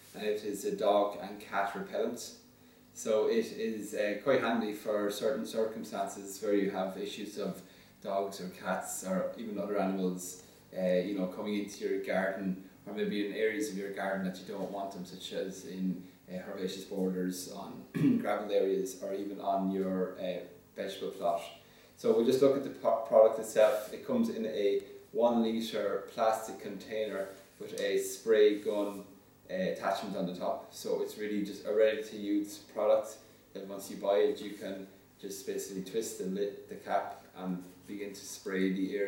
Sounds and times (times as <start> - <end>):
Speech: 0.0 - 2.4, 3.0 - 39.0.